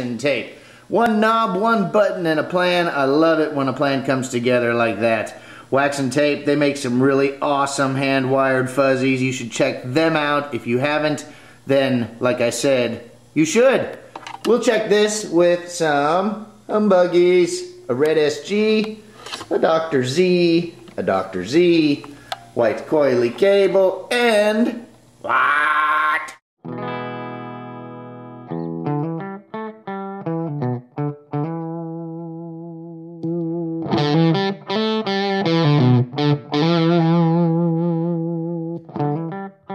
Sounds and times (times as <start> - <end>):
Distortion: 0.0 - 39.7
Bass guitar: 26.6 - 39.7.